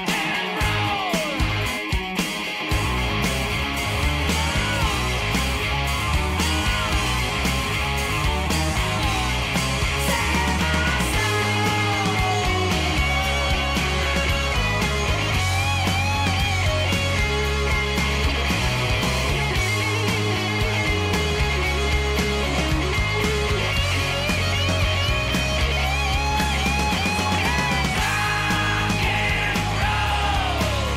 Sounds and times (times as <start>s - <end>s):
Singing: 0.0s - 1.6s, 8.8s - 13.8s, 27.3s - 30.9s
Psychedelic rock: 0.0s - 30.9s.